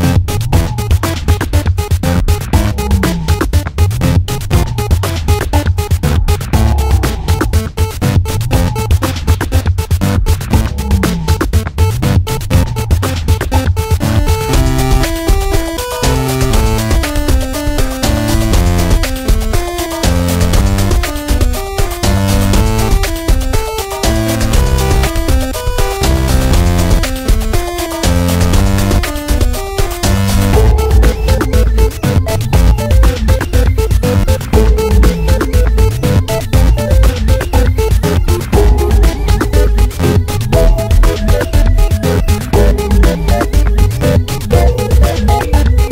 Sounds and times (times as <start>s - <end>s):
Music: 0.0s - 45.9s
Sound effect: 0.0s - 45.9s.